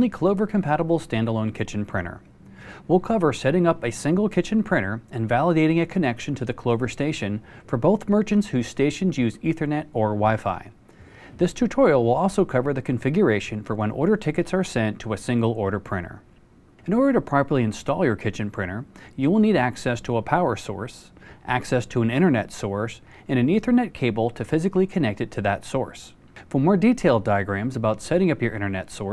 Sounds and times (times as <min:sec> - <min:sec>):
Speech: 0:00.0 - 0:02.3, 0:02.9 - 0:10.8, 0:11.4 - 0:29.1.